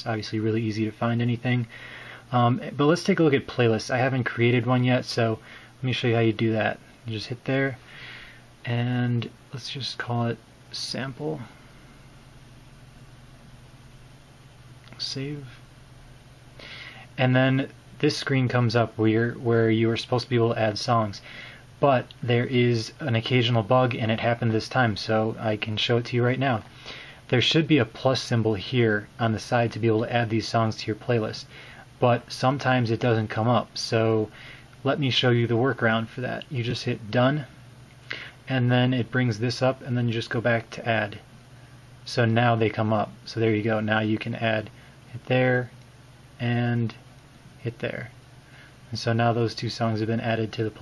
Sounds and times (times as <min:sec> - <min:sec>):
Speech: 0:00.0 - 0:01.7, 0:02.3 - 0:07.8, 0:08.7 - 0:11.5, 0:14.9 - 0:15.6, 0:17.2 - 0:21.2, 0:21.8 - 0:26.7, 0:27.3 - 0:37.5, 0:38.5 - 0:41.3, 0:42.0 - 0:45.8, 0:46.4 - 0:47.0, 0:47.6 - 0:48.2, 0:48.9 - 0:50.8.